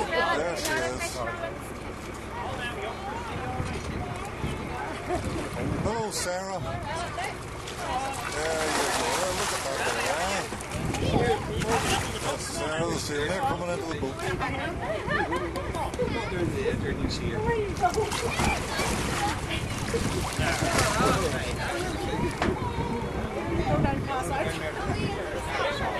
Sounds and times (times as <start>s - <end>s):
Boat, Water vehicle: 0.0s - 25.9s.